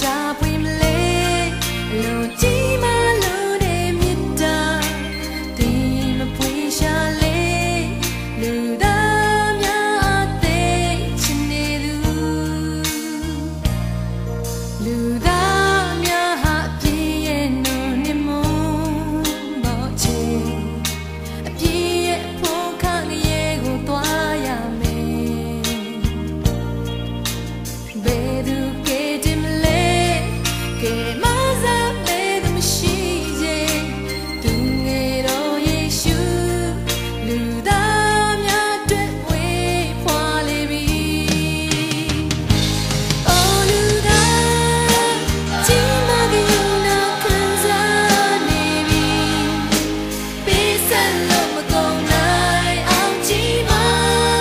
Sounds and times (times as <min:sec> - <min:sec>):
Christian music: 0:00.0 - 0:54.4.